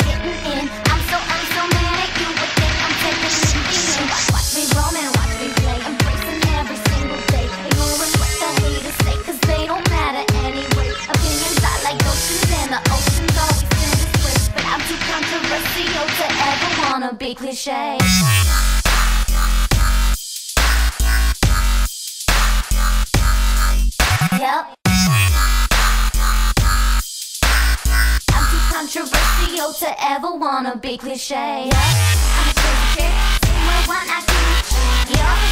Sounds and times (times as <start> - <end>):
Electronic music: 0.0 - 16.9, 18.0 - 29.8, 31.7 - 35.5.